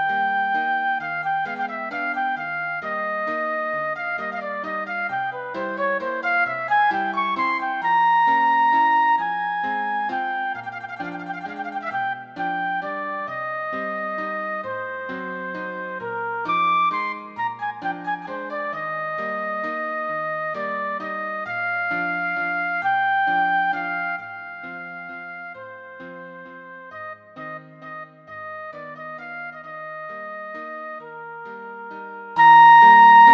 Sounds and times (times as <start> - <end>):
Wind instrument, woodwind instrument: 0.0 - 33.3.